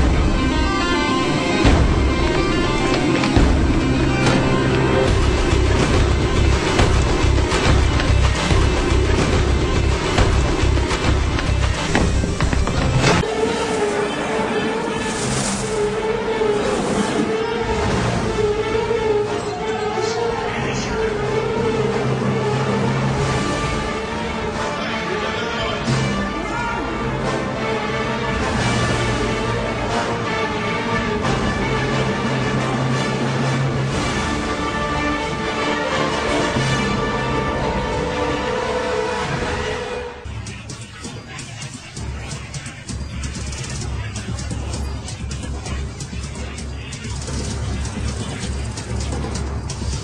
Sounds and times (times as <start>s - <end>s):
Music: 0.0s - 50.0s.